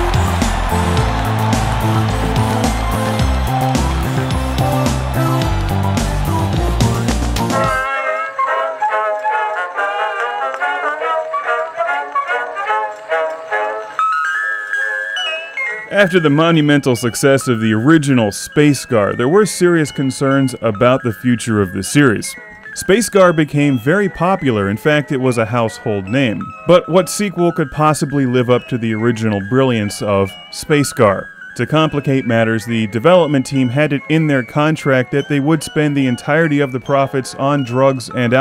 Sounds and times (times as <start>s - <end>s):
Music: 0.0s - 38.4s
Speech: 15.9s - 38.4s.